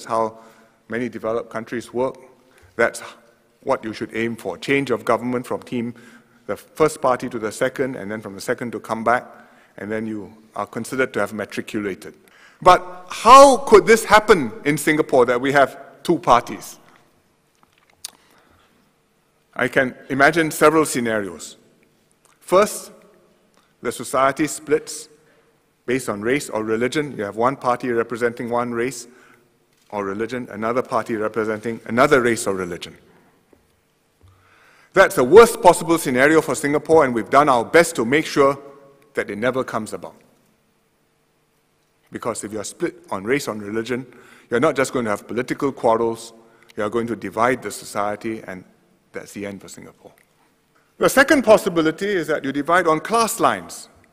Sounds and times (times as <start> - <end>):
Male speech, man speaking: 0.0 - 2.2, 2.8 - 16.8, 19.6 - 21.6, 22.4 - 23.0, 23.8 - 25.1, 25.9 - 29.1, 29.9 - 33.0, 35.0 - 38.6, 39.2 - 40.2, 42.1 - 50.2, 51.0 - 54.0
Narration, monologue: 0.0 - 54.1.